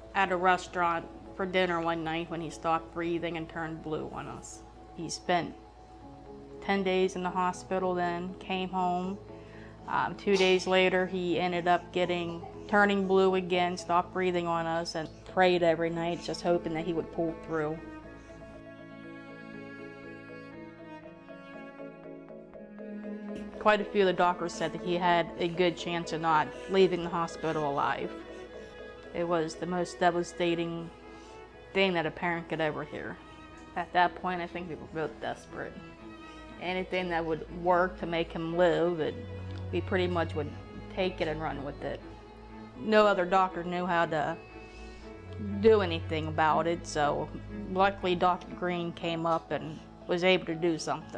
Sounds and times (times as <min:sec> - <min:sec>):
Music: 0:00.0 - 0:51.1
Speech: 0:00.2 - 0:05.6, 0:06.6 - 0:09.2, 0:09.9 - 0:17.8, 0:23.6 - 0:28.1, 0:29.2 - 0:30.9, 0:31.8 - 0:33.2, 0:33.8 - 0:35.8, 0:36.6 - 0:42.0, 0:42.8 - 0:44.4, 0:45.4 - 0:51.1.